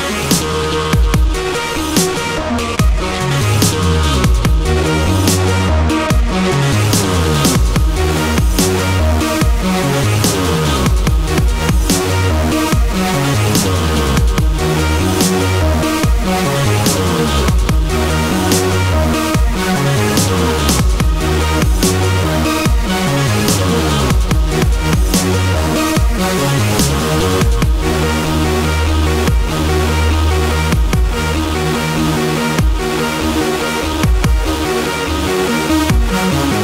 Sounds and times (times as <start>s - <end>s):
Dubstep: 0.0s - 36.6s.